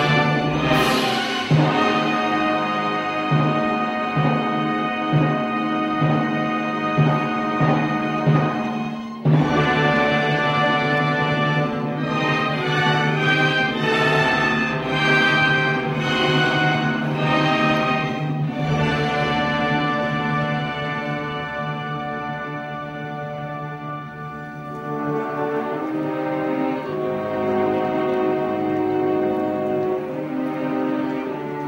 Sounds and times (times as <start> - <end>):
Orchestra: 0.0 - 31.6.